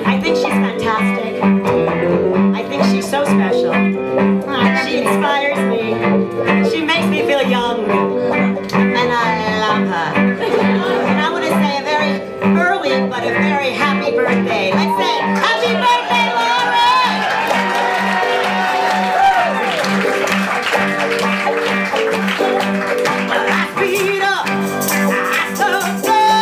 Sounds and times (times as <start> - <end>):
Music: 0.0 - 26.4
Speech: 4.5 - 6.0, 8.9 - 10.1.